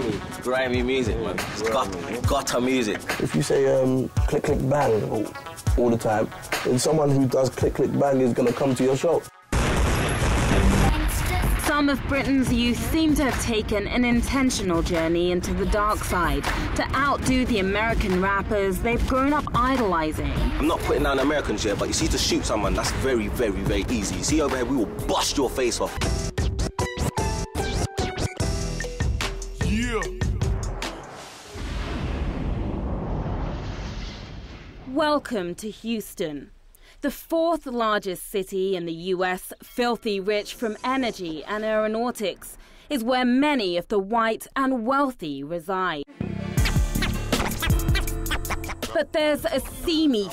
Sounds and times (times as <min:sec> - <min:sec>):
Music: 0:00.0 - 0:31.6, 0:46.1 - 0:50.3
Speech: 0:00.4 - 0:09.2, 0:10.9 - 0:26.0, 0:34.9 - 0:46.1.